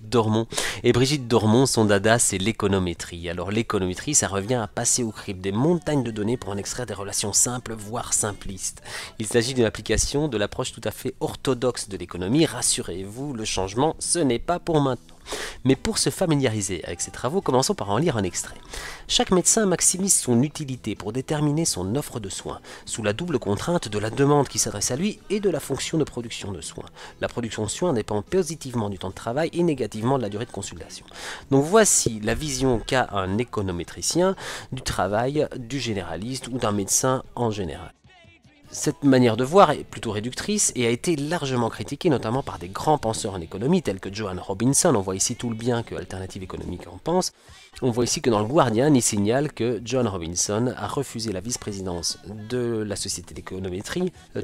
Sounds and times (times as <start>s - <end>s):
Speech: 0.0s - 15.0s, 15.6s - 38.0s, 38.6s - 54.4s.